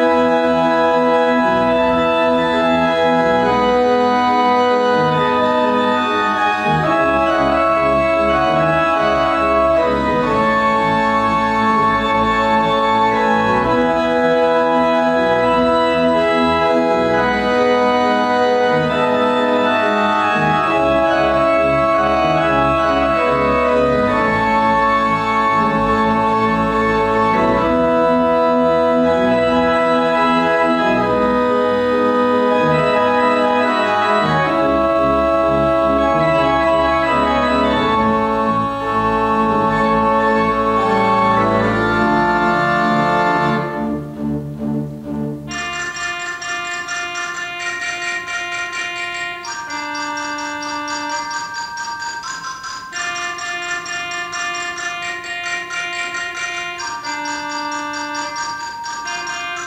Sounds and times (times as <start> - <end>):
Classical music: 0.0 - 59.6
Organ: 0.0 - 59.6
Piano: 0.0 - 59.6.